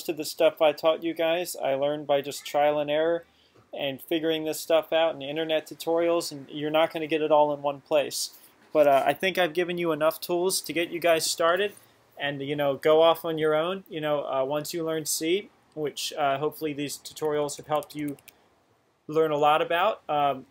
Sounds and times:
Speech: 0.0 - 3.2, 3.8 - 18.2, 19.1 - 20.5.

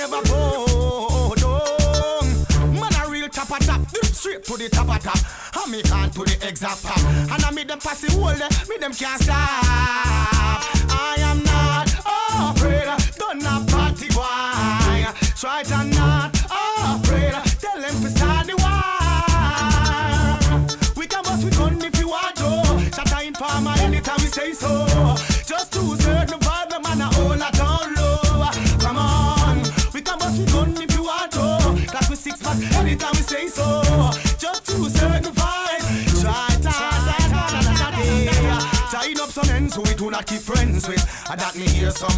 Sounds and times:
Reggae: 0.0 - 42.1.

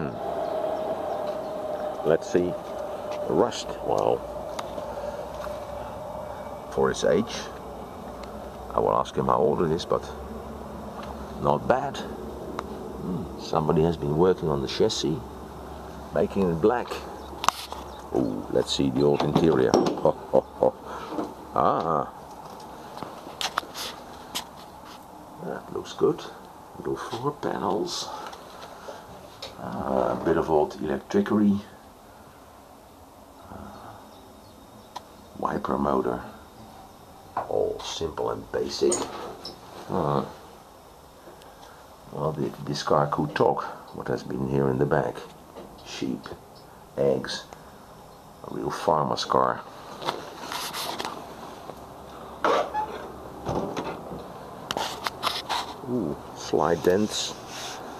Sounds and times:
Speech: 0.0 - 0.2, 2.0 - 2.6, 3.3 - 4.2, 6.7 - 7.6, 8.7 - 10.2, 11.4 - 12.2, 13.0 - 15.3, 16.1 - 17.1, 18.4 - 20.8, 21.5 - 22.2, 25.4 - 28.3, 29.5 - 31.8, 33.4 - 34.0, 35.4 - 36.4, 37.4 - 40.4, 42.1 - 46.4, 47.0 - 47.5, 48.4 - 49.7, 55.8 - 57.4
Outside, rural or natural: 0.0 - 57.9.

